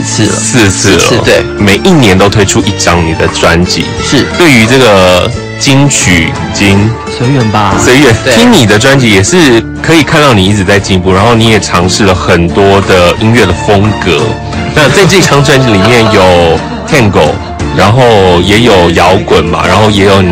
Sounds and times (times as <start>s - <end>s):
Music: 0.0s - 20.3s
Speech: 0.0s - 20.3s.